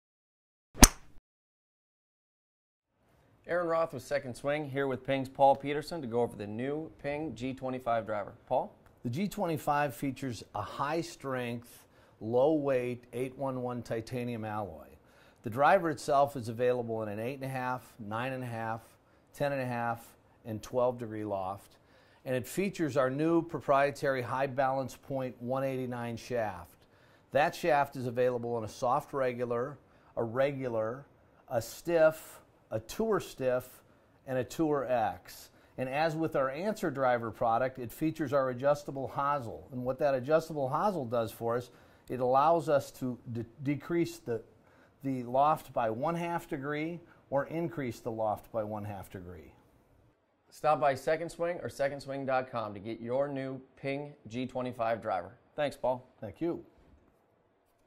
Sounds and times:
Speech: 3.4 - 49.6, 50.5 - 56.8.

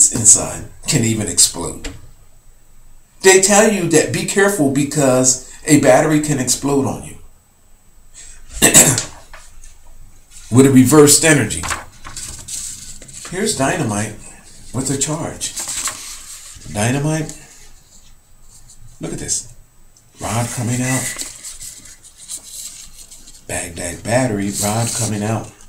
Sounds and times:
Speech: 0.0 - 2.0, 3.2 - 7.3, 10.5 - 11.7, 13.3 - 15.6, 16.7 - 17.4, 19.0 - 19.6, 20.2 - 21.2, 23.5 - 25.6
Inside, small room: 0.0 - 25.6.

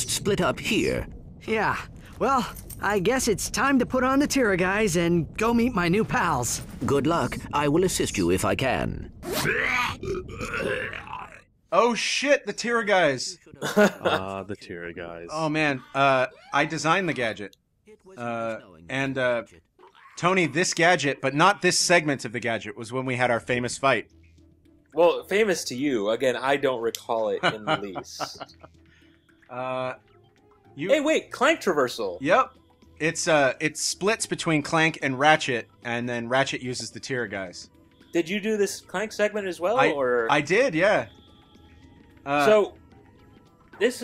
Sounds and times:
Speech: 11.8 - 24.0, 25.0 - 28.4, 38.2 - 41.1, 42.3 - 42.7.

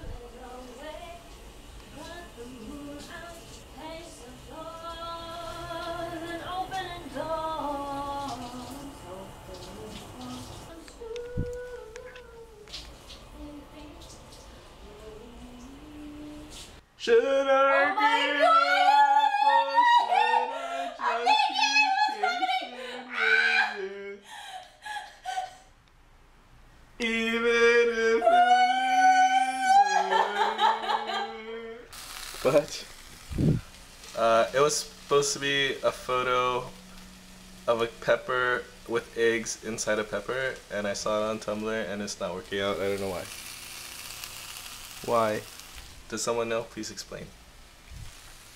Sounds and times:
Speech: 32.5 - 32.9, 45.0 - 45.4, 46.1 - 47.3.

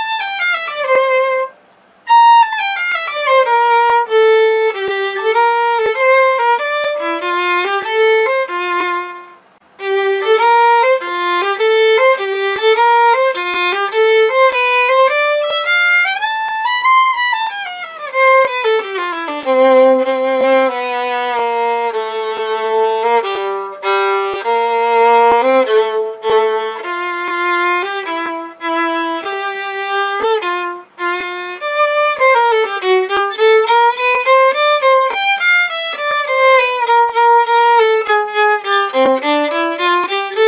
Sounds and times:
Violin, fiddle: 0.0 - 40.4.

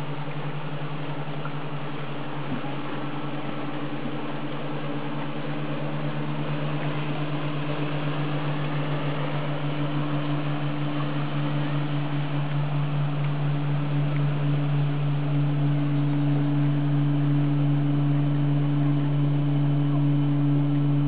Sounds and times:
Motorboat, speedboat: 0.0 - 21.0.

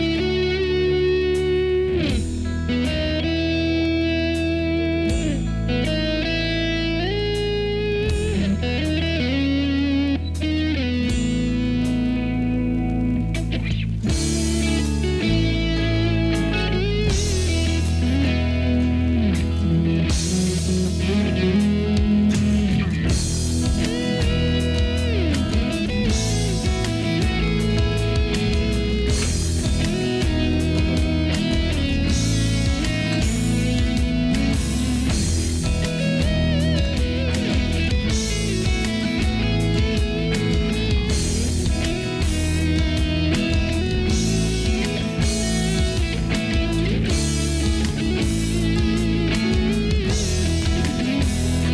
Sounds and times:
Music: 0.0 - 51.7.

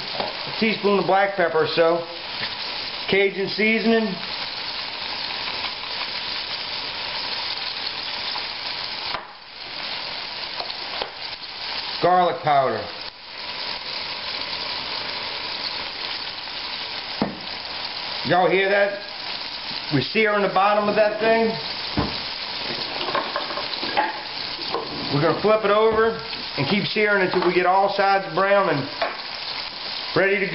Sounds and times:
Frying (food): 0.0 - 30.5
Sizzle: 0.0 - 30.5.

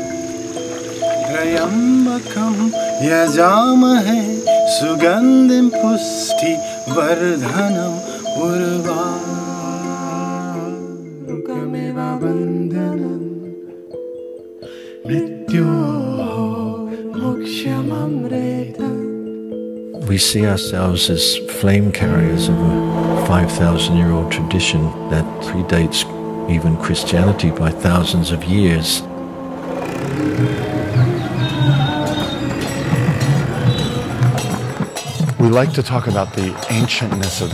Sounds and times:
Music: 0.0 - 37.5
Speech: 20.0 - 22.6, 23.2 - 29.1, 35.4 - 37.5.

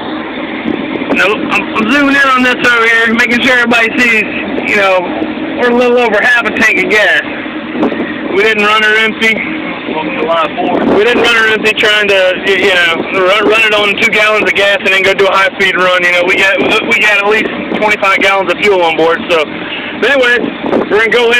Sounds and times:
Vehicle: 0.0 - 21.3
Speech: 1.1 - 7.3, 8.3 - 21.3.

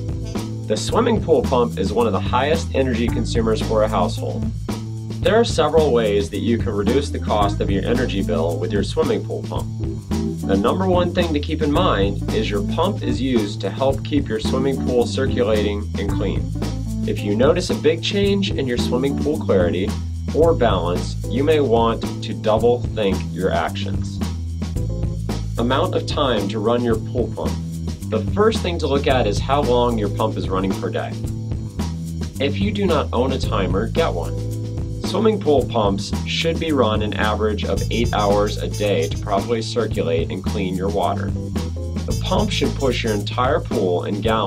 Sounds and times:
Music: 0.0 - 44.4
Speech: 0.7 - 4.5, 5.2 - 9.7, 10.5 - 16.5, 17.1 - 24.2, 25.6 - 31.2, 32.4 - 34.4, 35.0 - 41.4, 42.1 - 44.4.

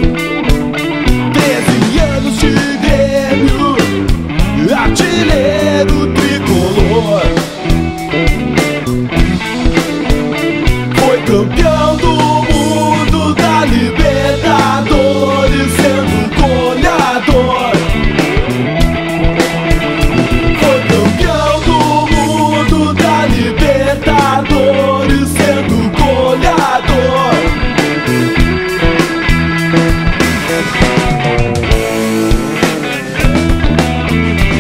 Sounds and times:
Ska: 0.0 - 34.6.

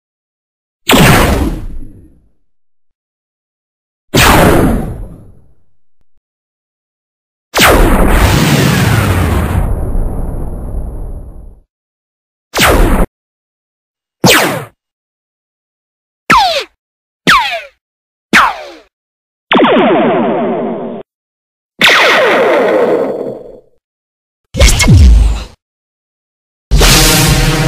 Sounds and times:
Sound effect: 0.9 - 2.4, 4.1 - 5.6, 7.6 - 11.7, 12.6 - 13.1, 14.2 - 14.9, 16.3 - 17.8, 18.4 - 18.9, 19.5 - 21.1, 21.8 - 23.8, 24.6 - 25.6, 26.7 - 27.6.

